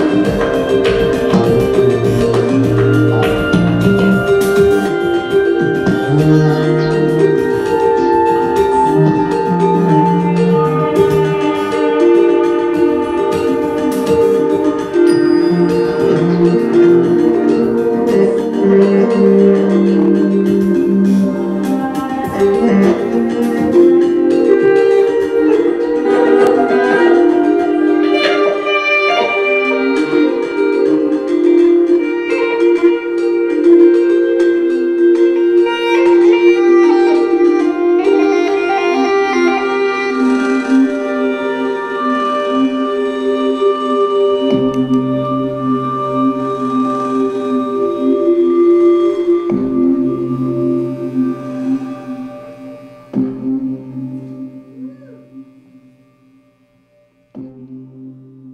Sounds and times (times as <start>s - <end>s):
Music: 0.0s - 58.5s.